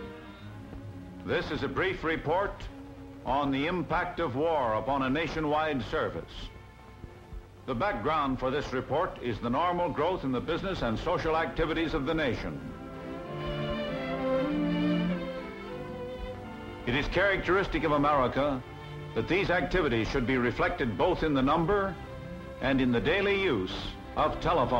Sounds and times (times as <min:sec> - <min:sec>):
Music: 0:00.0 - 0:24.7
Speech: 0:01.3 - 0:02.7, 0:03.3 - 0:06.5, 0:07.7 - 0:12.6, 0:16.9 - 0:18.6, 0:19.2 - 0:22.0, 0:22.6 - 0:24.7.